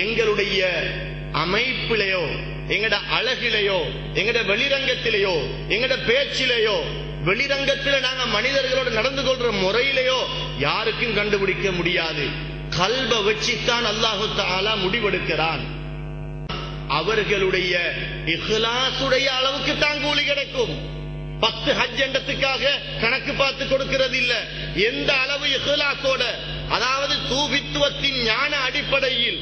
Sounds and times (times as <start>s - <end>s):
Male speech, man speaking: 0.0s - 15.8s, 16.9s - 29.4s
Narration, monologue: 0.0s - 29.4s.